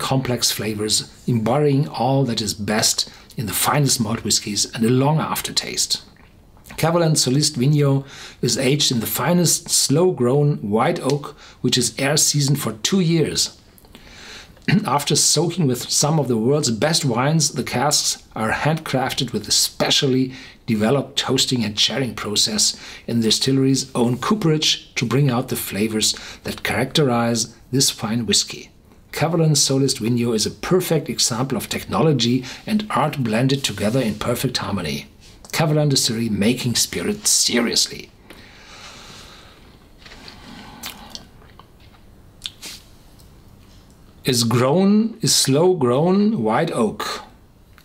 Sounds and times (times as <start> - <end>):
Speech: 0.0 - 6.1, 6.7 - 13.6, 14.7 - 38.2, 44.2 - 47.4.